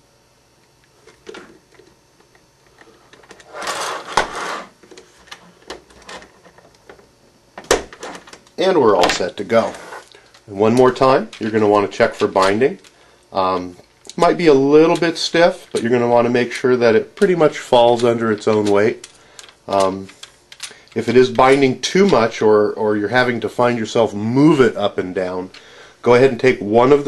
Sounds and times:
Inside, small room: 0:00.0 - 0:27.0
Speech: 0:08.6 - 0:09.8, 0:10.5 - 0:19.0, 0:19.7 - 0:20.2, 0:21.0 - 0:27.0.

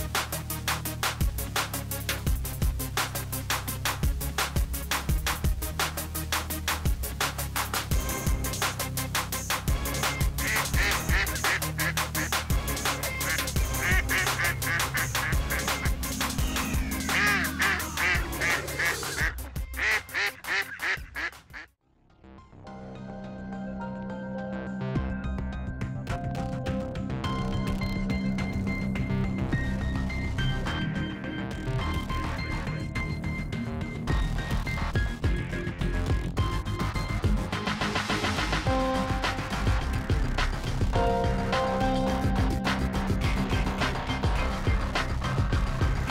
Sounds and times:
Music: 0:00.0 - 0:46.1
Quack: 0:10.4 - 0:12.5, 0:13.1 - 0:21.7.

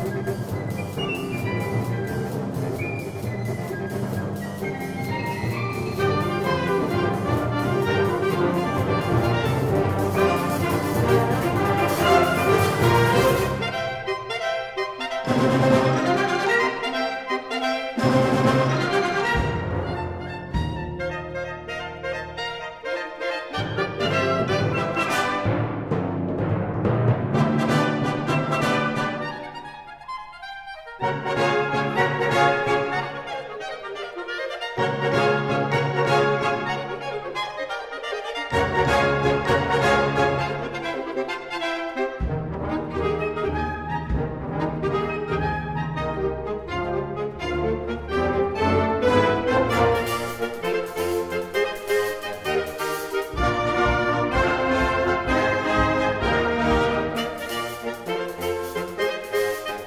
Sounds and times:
Saxophone: 0:00.0 - 0:25.5, 0:28.4 - 0:59.8
Timpani: 0:00.0 - 0:59.8.

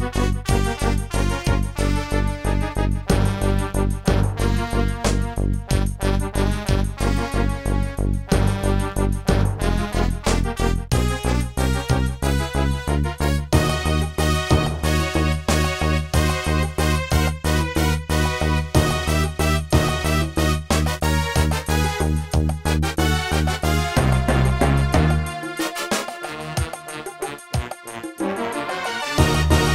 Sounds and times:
Music: 0:00.0 - 0:29.7.

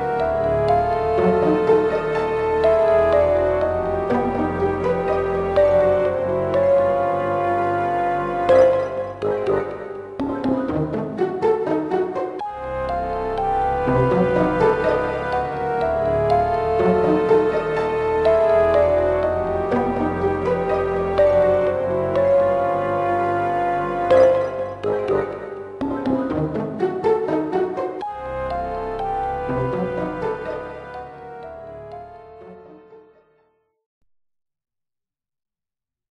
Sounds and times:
Video game music: 0:00.0 - 0:33.7.

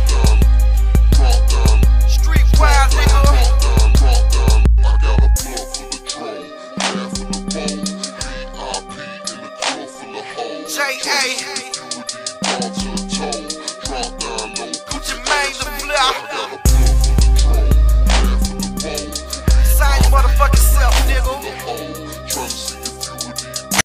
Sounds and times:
Music: 0:00.0 - 0:23.8.

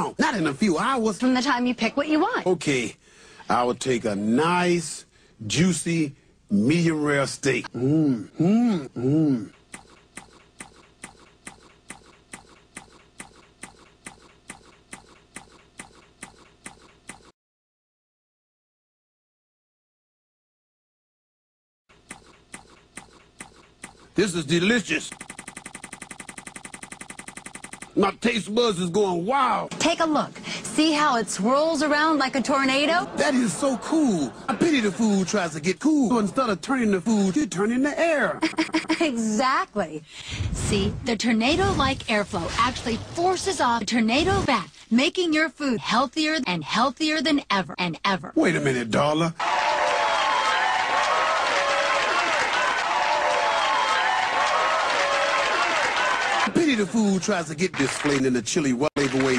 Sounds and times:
Speech: 0:00.0 - 0:09.5, 0:24.2 - 0:25.1, 0:28.0 - 0:40.0, 0:40.6 - 0:49.4, 0:56.5 - 0:59.3.

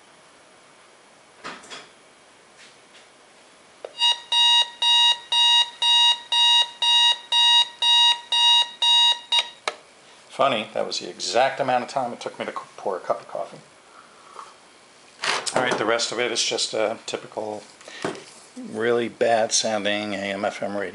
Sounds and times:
Alarm: 0:04.0 - 0:09.6.

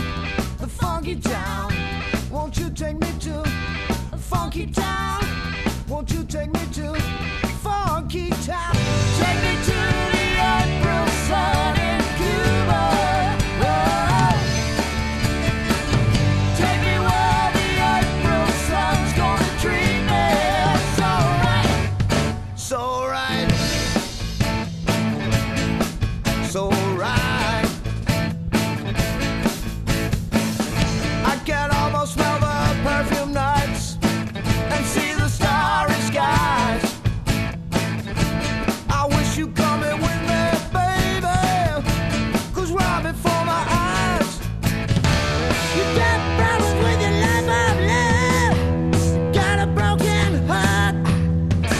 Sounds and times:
Independent music: 0:00.0 - 0:51.7
Singing: 0:07.8 - 0:14.6, 0:16.5 - 0:22.0, 0:34.7 - 0:37.0, 0:45.8 - 0:51.1.

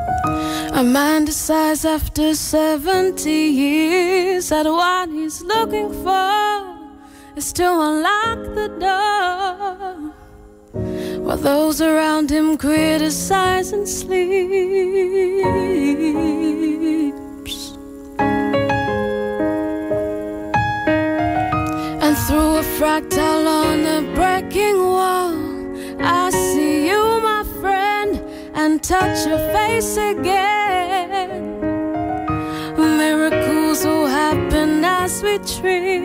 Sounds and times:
Music: 0:00.0 - 0:36.0.

